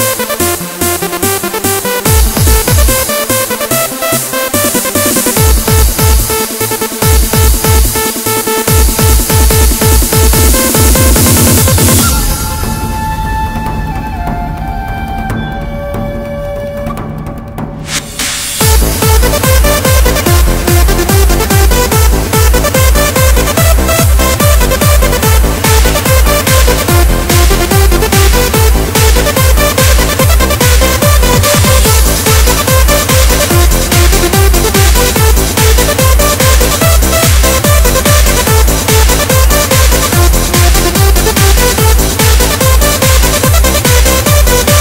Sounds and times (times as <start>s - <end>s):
Music: 0.0s - 44.8s.